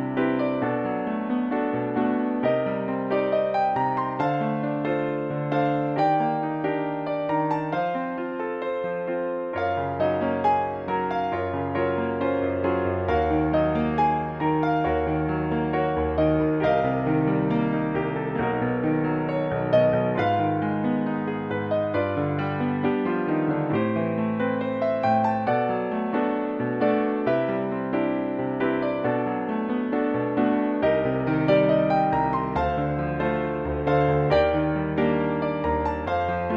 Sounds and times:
Music: 0.0 - 36.5.

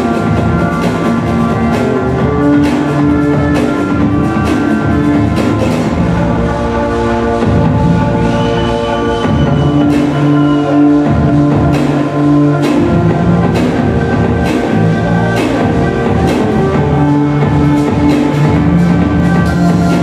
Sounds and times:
Techno: 0.0 - 20.0.

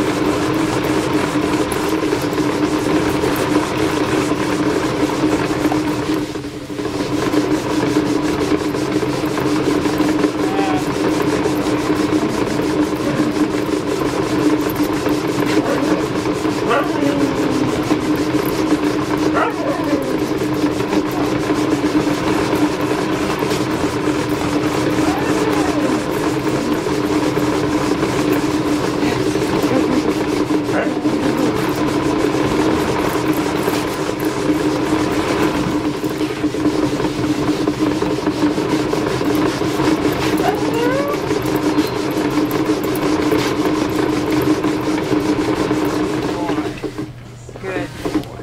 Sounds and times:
Bow-wow: 15.6 - 16.0, 16.7 - 17.4, 19.4 - 20.2, 30.7 - 31.4.

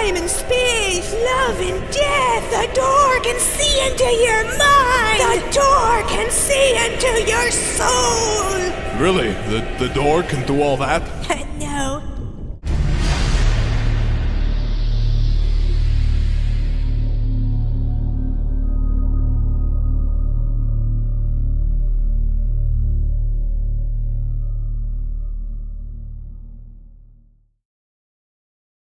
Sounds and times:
Music: 11.7 - 27.6.

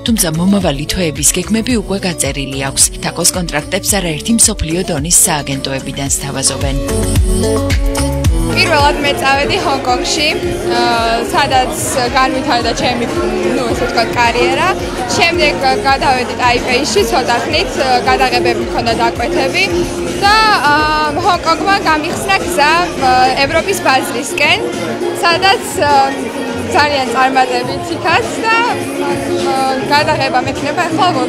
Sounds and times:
Speech: 0.0 - 6.8, 8.5 - 24.6, 25.2 - 28.8, 29.4 - 31.2
Music: 0.0 - 31.2.

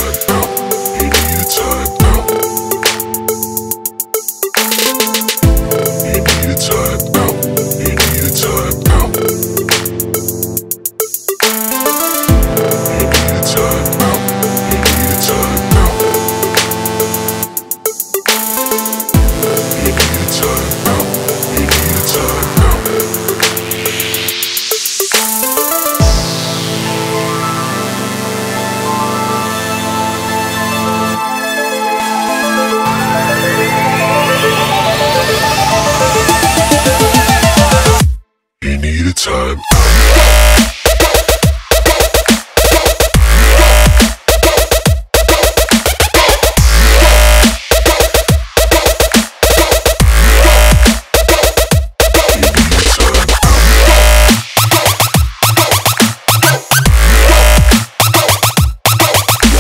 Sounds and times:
Dubstep: 0.0 - 38.1, 39.2 - 59.6.

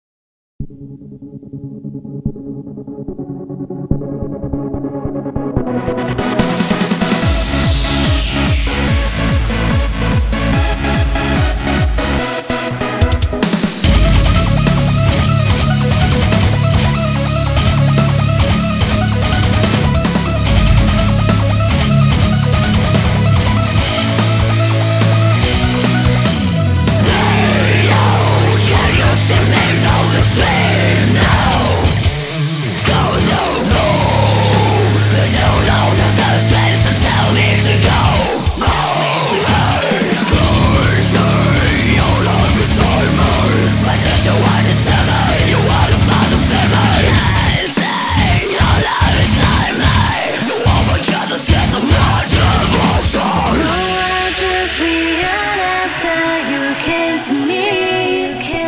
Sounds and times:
Heavy metal: 6.0 - 58.6.

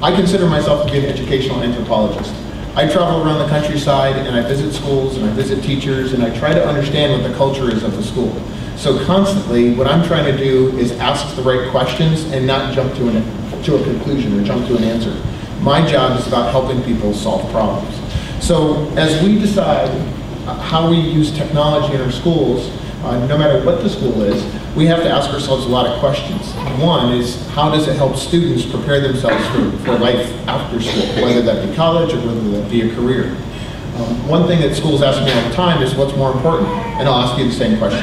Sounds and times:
Male speech, man speaking: 0.0 - 33.4, 34.0 - 38.0.

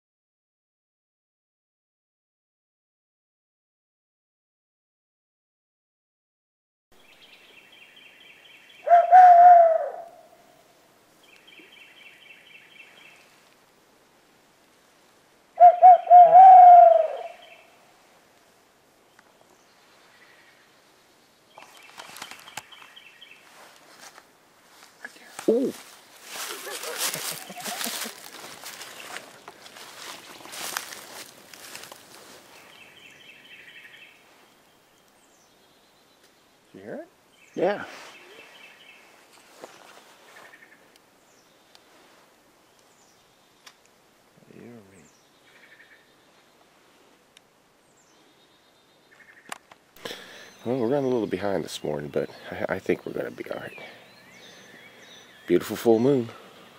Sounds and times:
Bird: 7.0 - 10.4, 15.6 - 17.8, 21.5 - 23.7, 25.0 - 31.0, 47.9 - 56.7.

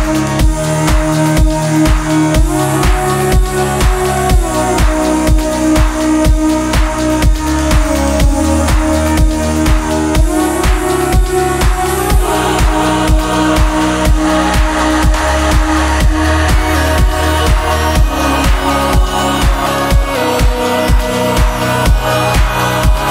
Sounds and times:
Music: 0.0 - 23.1.

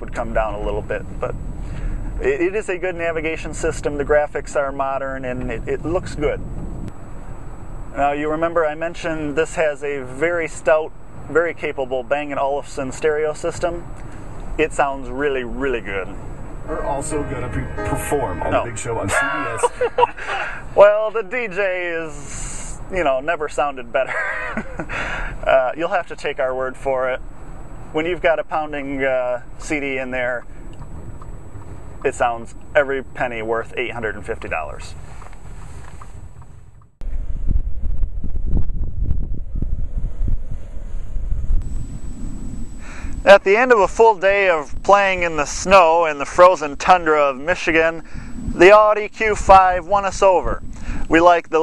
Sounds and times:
Speech: 0.0 - 1.3, 2.2 - 6.4, 7.9 - 13.9, 14.6 - 20.1, 20.7 - 24.2, 25.4 - 27.2, 27.9 - 30.4, 32.0 - 35.0, 43.2 - 48.0, 48.6 - 51.6
Car: 0.0 - 16.8, 18.9 - 48.6
Outside, rural or natural: 0.0 - 51.6.

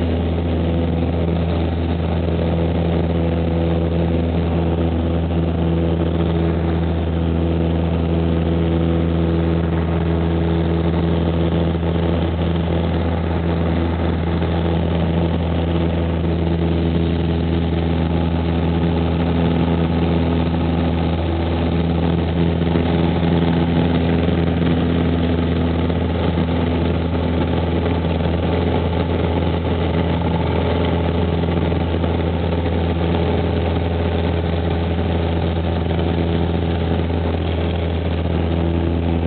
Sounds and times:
Aircraft: 0.0 - 39.2.

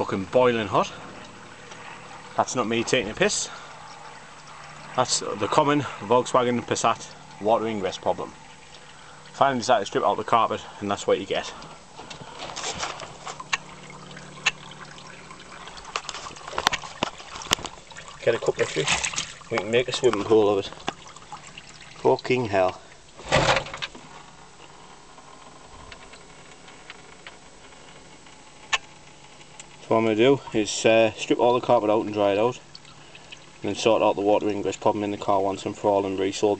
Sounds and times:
Speech: 0.0 - 1.0, 2.4 - 3.6, 5.0 - 8.4, 9.4 - 11.6, 18.2 - 20.8, 22.0 - 22.8, 29.8 - 32.6, 33.6 - 36.5
Water: 0.0 - 36.5.

